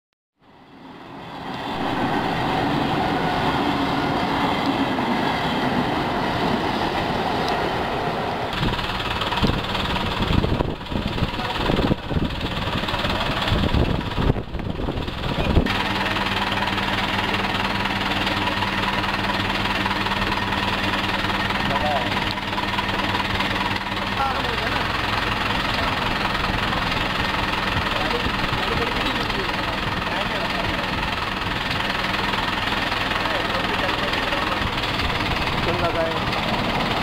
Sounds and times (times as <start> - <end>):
Railroad car, train wagon: 0.4 - 37.0.